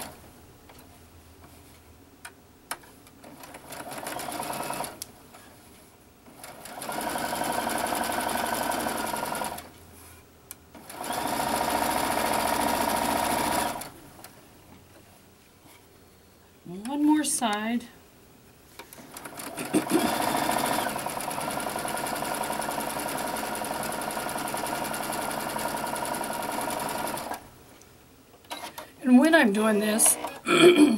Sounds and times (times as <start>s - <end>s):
Sewing machine: 3.2s - 5.1s, 6.3s - 9.7s, 10.8s - 14.0s, 18.9s - 27.4s
Speech: 16.7s - 18.0s, 29.0s - 30.2s.